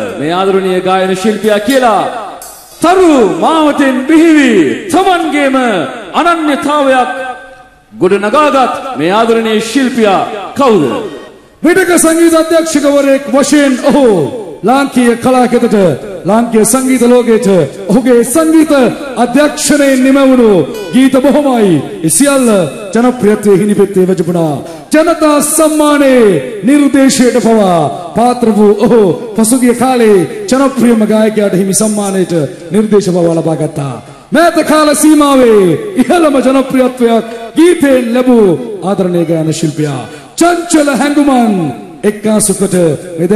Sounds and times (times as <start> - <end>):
Speech: 0.0 - 43.3.